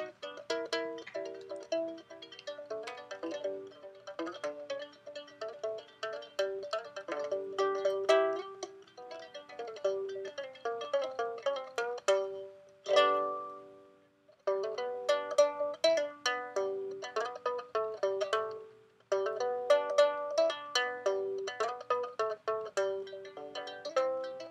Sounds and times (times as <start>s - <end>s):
Zither: 0.0s - 24.5s.